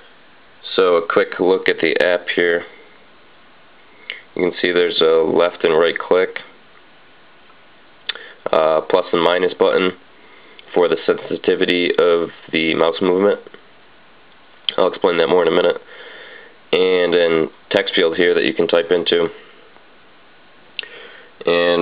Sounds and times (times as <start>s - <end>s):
Speech: 0.6s - 2.8s, 4.1s - 6.6s, 8.4s - 10.0s, 10.7s - 13.6s, 14.7s - 15.9s, 16.7s - 19.4s, 21.4s - 21.8s.